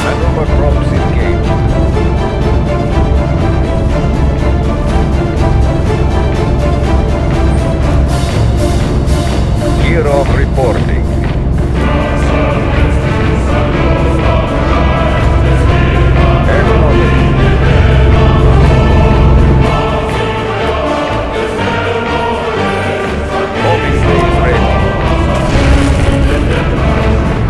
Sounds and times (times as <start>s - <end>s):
Theme music: 0.0s - 27.5s.